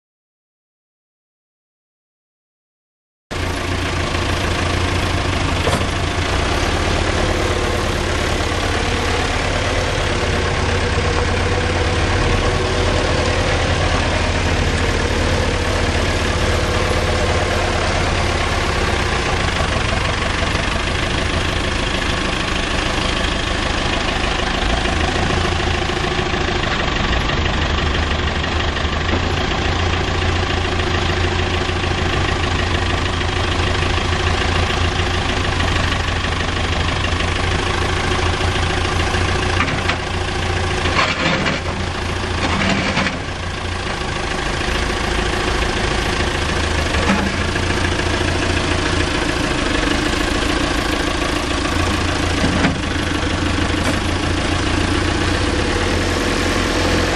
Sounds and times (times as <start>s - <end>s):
Vehicle: 3.3s - 57.1s.